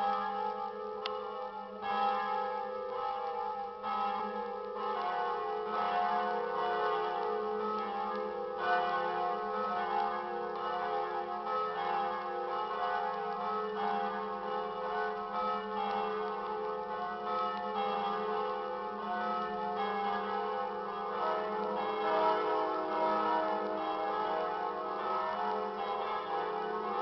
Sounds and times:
Change ringing (campanology): 0.0 - 27.0.

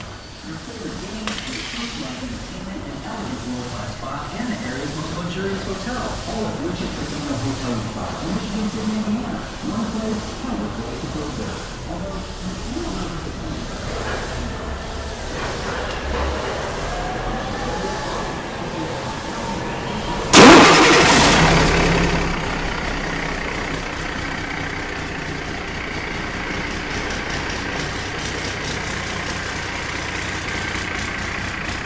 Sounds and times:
Heavy engine (low frequency): 0.0 - 31.8
Idling: 0.0 - 31.8.

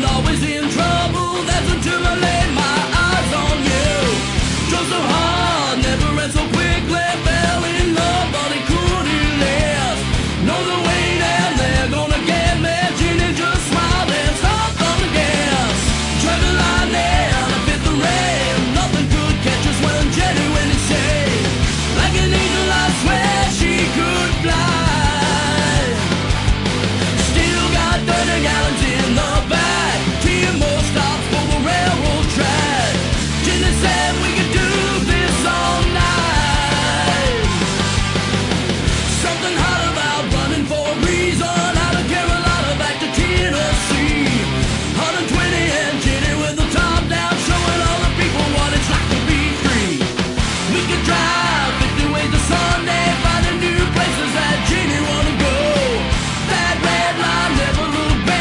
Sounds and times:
Music: 0.0 - 58.4.

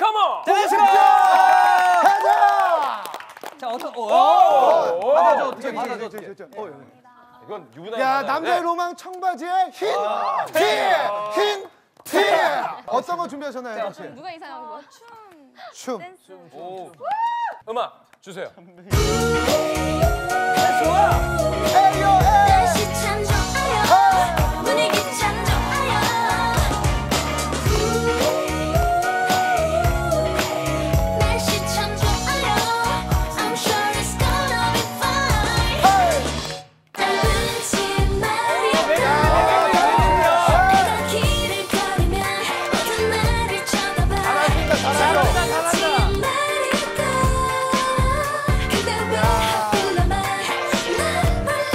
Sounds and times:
Music: 18.9 - 51.7.

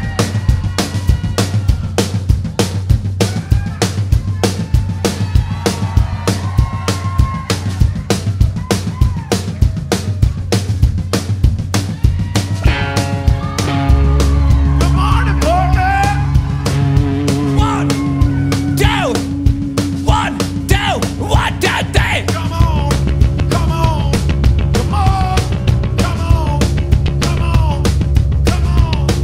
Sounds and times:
Bass drum: 0.0 - 29.2
Drum kit: 0.0 - 29.2.

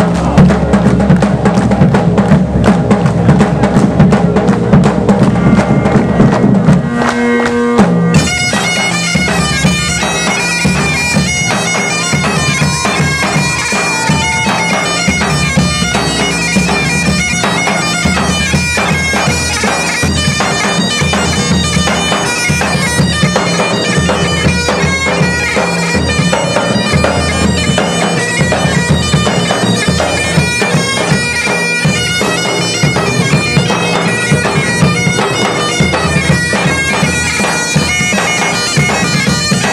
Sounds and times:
Bagpipes: 0.0 - 39.7
Wind instrument, woodwind instrument: 0.0 - 39.7.

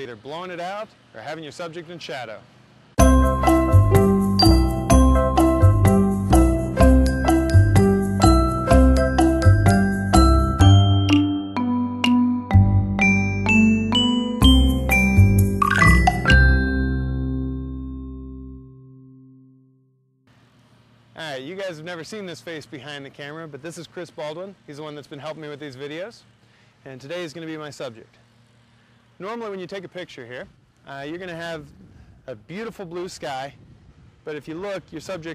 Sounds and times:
Speech: 0.0 - 2.5, 21.2 - 28.2, 29.2 - 33.6, 34.2 - 35.3.

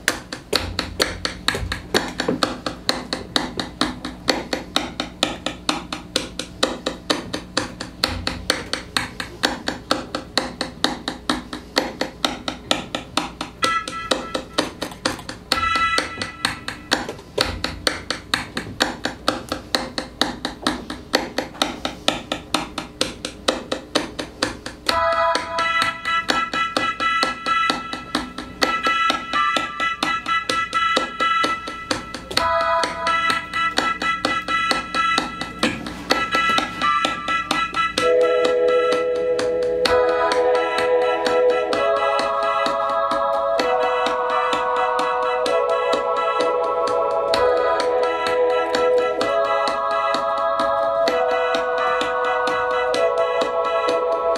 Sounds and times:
Music: 0.0 - 54.3.

